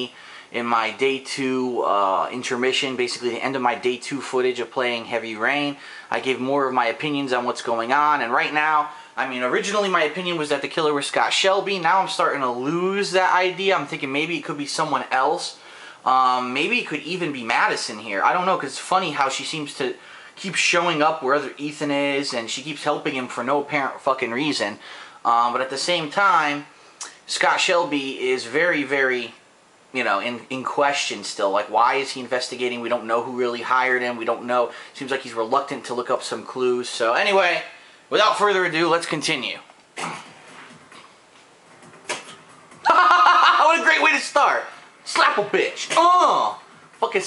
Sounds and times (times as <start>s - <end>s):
Speech: 0.0s - 40.3s, 42.9s - 47.2s.